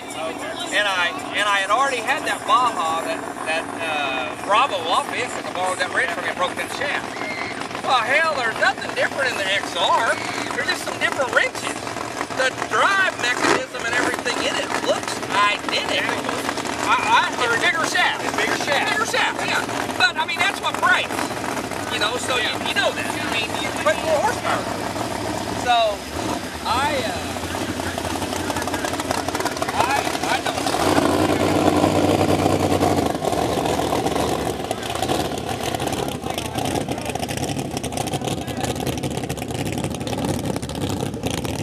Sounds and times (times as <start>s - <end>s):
Speech: 0.0s - 7.1s, 7.8s - 11.8s, 12.4s - 21.2s, 26.6s - 29.0s, 29.7s - 30.7s
Motorboat, speedboat: 0.0s - 41.6s.